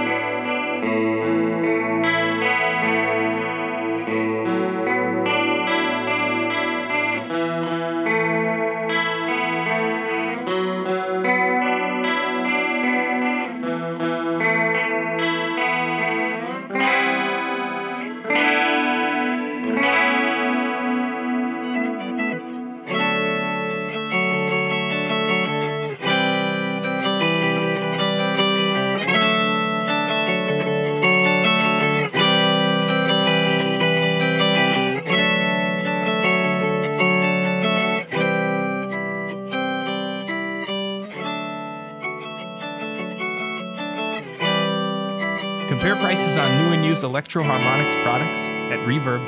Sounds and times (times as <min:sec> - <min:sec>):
Effects unit: 0:00.0 - 0:49.2
Electric guitar: 0:00.0 - 0:49.2.